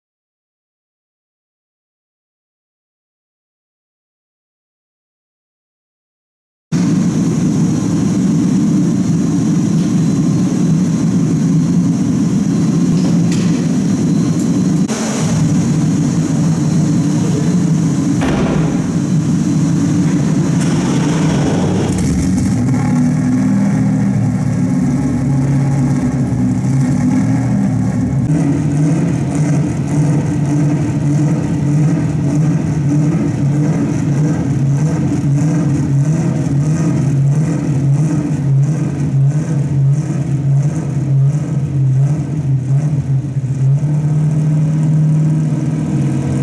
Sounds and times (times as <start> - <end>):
Race car, auto racing: 6.8 - 46.4.